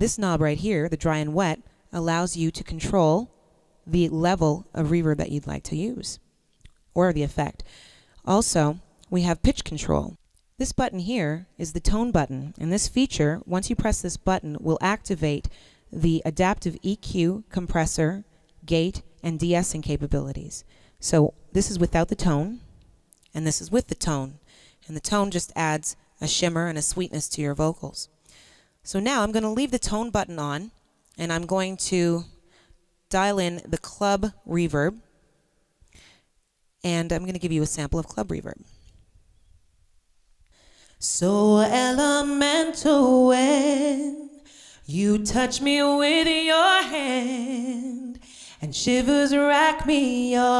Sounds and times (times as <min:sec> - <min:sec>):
Speech: 0:00.0 - 0:03.3, 0:03.9 - 0:06.2, 0:07.0 - 0:07.6, 0:08.2 - 0:22.6, 0:23.3 - 0:28.1, 0:28.9 - 0:32.4, 0:33.1 - 0:35.0, 0:36.8 - 0:38.7.